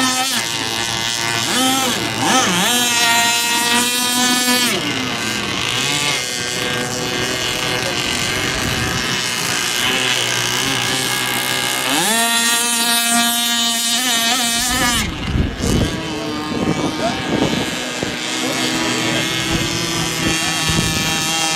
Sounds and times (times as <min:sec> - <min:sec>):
Motorboat, speedboat: 0:00.0 - 0:21.5.